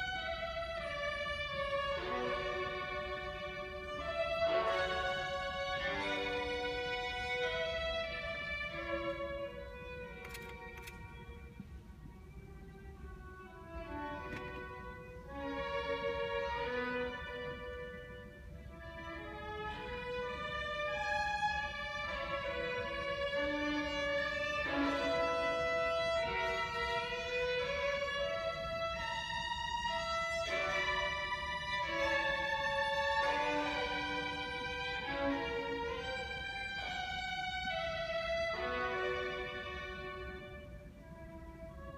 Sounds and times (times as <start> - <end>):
Violin, fiddle: 0.0 - 41.9.